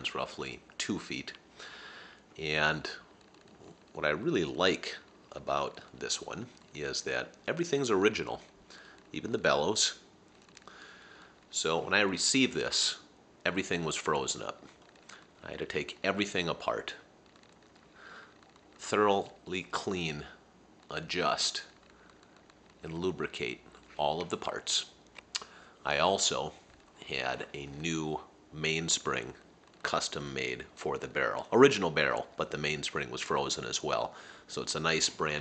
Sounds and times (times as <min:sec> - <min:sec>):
Speech: 0:00.0 - 0:01.4, 0:02.4 - 0:03.1, 0:04.0 - 0:08.5, 0:09.1 - 0:10.0, 0:11.5 - 0:14.6, 0:15.4 - 0:17.1, 0:18.8 - 0:21.7, 0:22.8 - 0:25.0, 0:25.8 - 0:35.4.